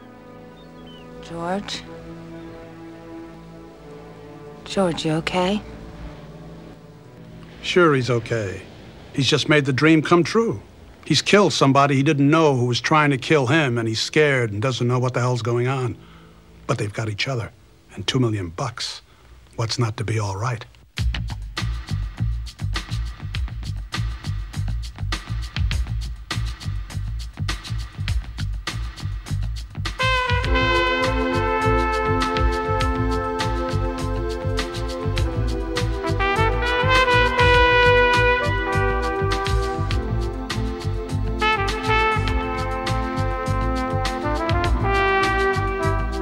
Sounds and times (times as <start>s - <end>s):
Music: 0.0s - 18.6s, 20.9s - 46.2s.